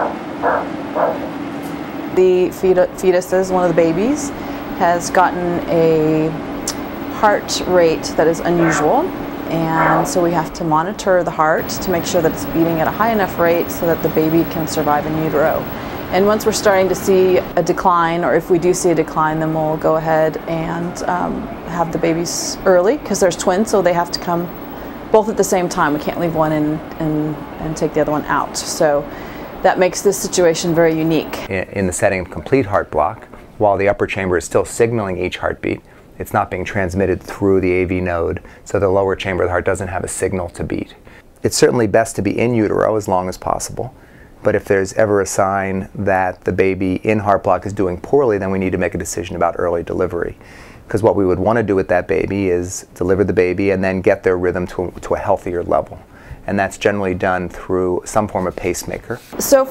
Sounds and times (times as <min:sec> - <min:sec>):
Speech: 0:02.2 - 0:06.4, 0:07.2 - 0:24.5, 0:25.2 - 0:59.7.